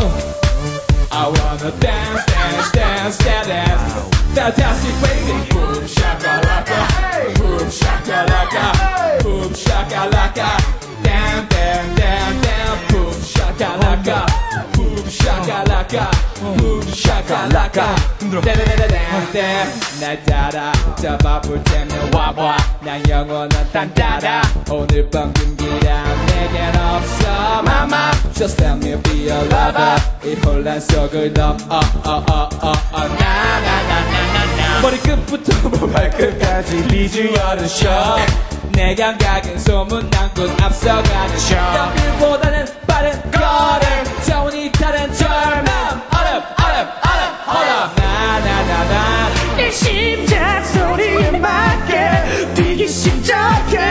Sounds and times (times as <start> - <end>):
Music: 0.0 - 53.9
Singing: 0.0 - 53.9.